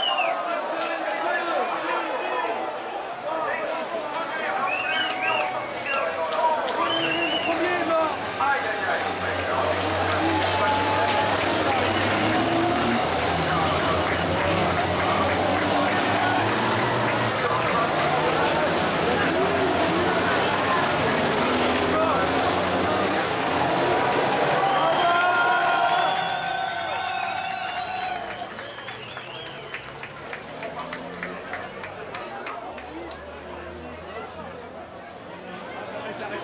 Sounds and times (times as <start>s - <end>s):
Speech: 0.0s - 26.0s, 30.6s - 36.4s
Truck: 0.0s - 36.4s.